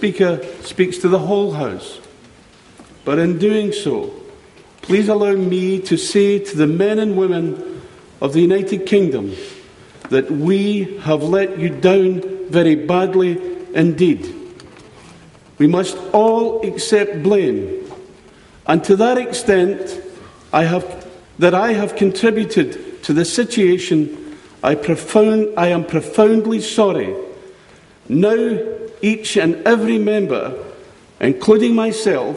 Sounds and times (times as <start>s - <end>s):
Male speech, man speaking: 0.0s - 2.0s, 3.0s - 9.5s, 10.1s - 14.5s, 15.6s - 17.8s, 18.7s - 27.4s, 28.1s - 32.3s.